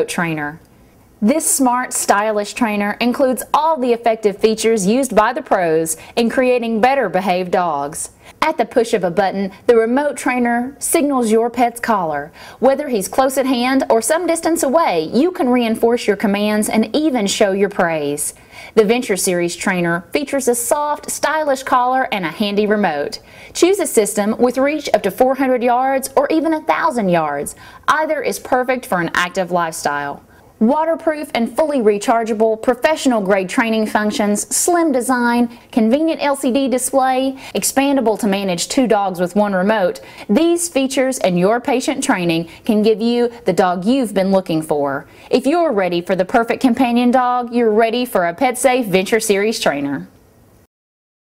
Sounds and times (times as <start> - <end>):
Speech: 0.0 - 0.6, 1.2 - 50.2.